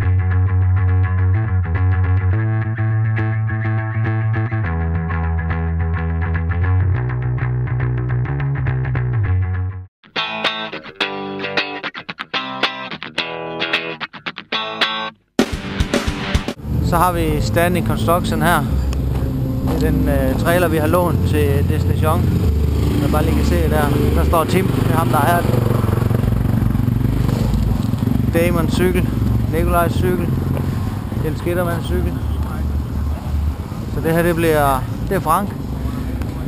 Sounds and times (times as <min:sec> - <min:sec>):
Music: 0:00.0 - 0:25.4
Vehicle: 0:16.6 - 0:36.4
Speech: 0:16.8 - 0:18.7, 0:19.7 - 0:22.2, 0:23.0 - 0:25.5, 0:28.4 - 0:30.4, 0:31.2 - 0:32.7, 0:34.0 - 0:35.6.